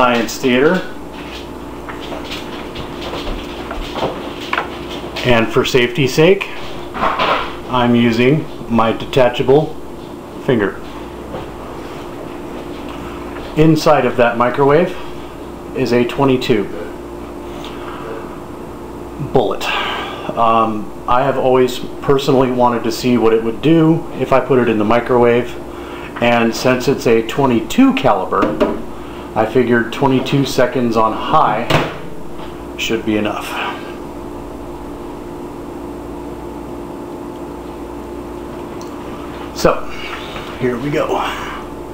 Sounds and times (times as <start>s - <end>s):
Speech: 0.0s - 1.0s, 5.2s - 6.7s, 7.7s - 9.8s, 10.4s - 10.9s, 13.6s - 15.1s, 15.8s - 17.0s, 19.2s - 25.6s, 26.2s - 28.7s, 29.4s - 31.9s, 32.8s - 33.9s, 39.6s - 40.0s, 40.6s - 41.6s
Microwave oven: 0.0s - 41.9s.